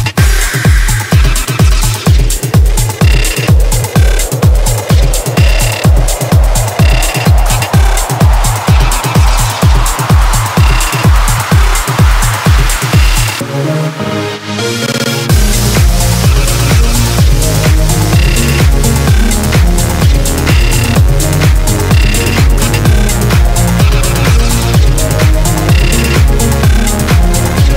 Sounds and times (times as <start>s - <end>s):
Techno: 0.0s - 27.7s.